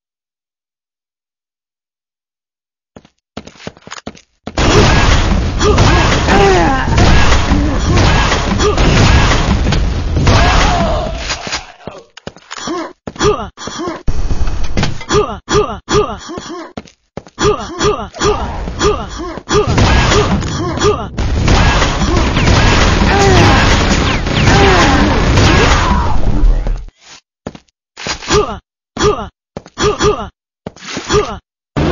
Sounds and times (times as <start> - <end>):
Boom: 4.6 - 11.0, 21.2 - 26.5.